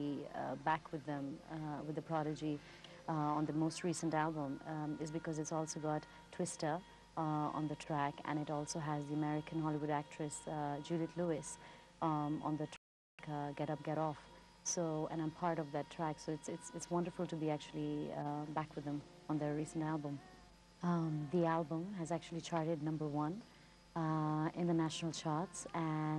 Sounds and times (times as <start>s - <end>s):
Speech: 0.0s - 20.2s, 20.8s - 23.4s, 24.0s - 26.1s.